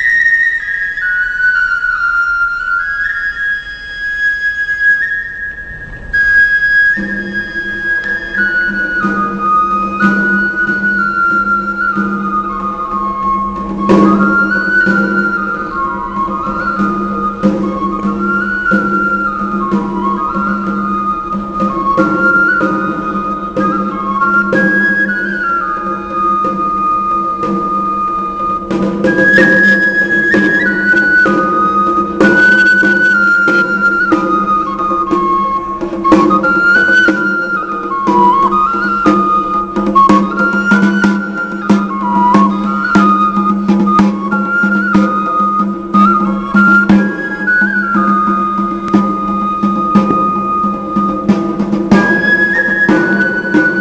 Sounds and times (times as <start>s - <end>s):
Flute: 0.0s - 53.8s
Drum: 6.0s - 53.8s.